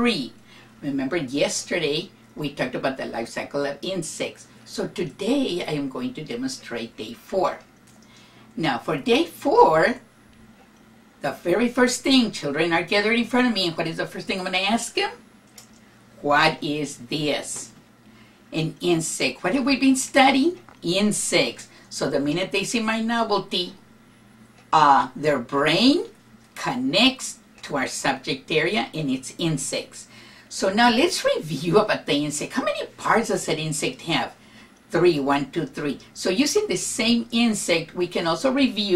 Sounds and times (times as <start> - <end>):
Speech: 0.0 - 7.7, 8.6 - 10.1, 11.2 - 15.2, 16.2 - 17.8, 18.5 - 23.8, 24.7 - 38.9.